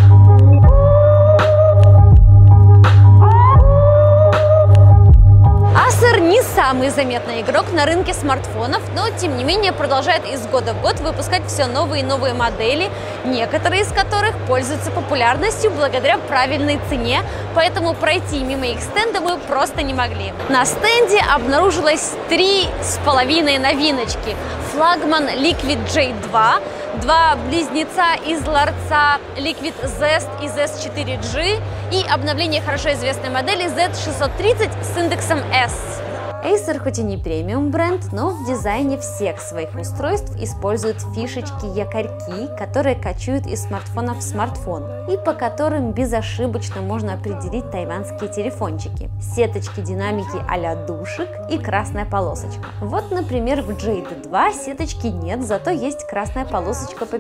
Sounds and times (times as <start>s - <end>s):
Speech: 5.8s - 57.2s.